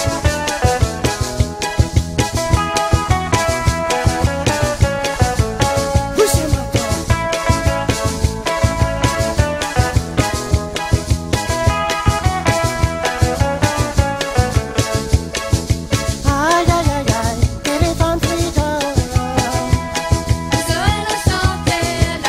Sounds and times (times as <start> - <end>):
Music: 0.0 - 22.2
Speech: 6.1 - 7.1.